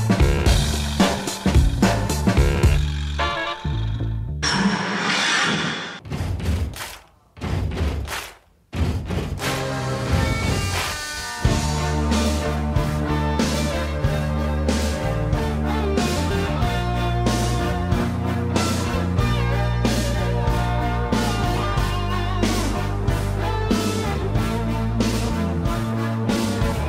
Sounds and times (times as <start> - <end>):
Soundtrack music: 9.4 - 26.8.